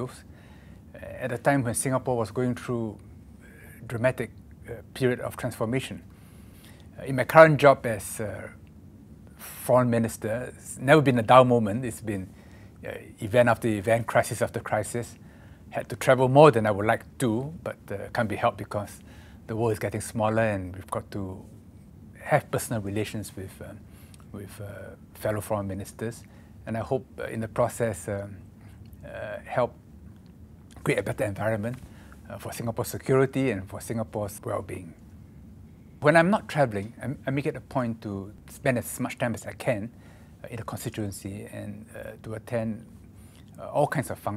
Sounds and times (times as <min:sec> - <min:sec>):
Male speech, man speaking: 0:00.0 - 0:00.3, 0:01.0 - 0:06.1, 0:07.0 - 0:08.6, 0:09.4 - 0:21.5, 0:22.2 - 0:28.4, 0:29.0 - 0:29.8, 0:30.8 - 0:35.0, 0:36.0 - 0:42.9, 0:43.6 - 0:44.3.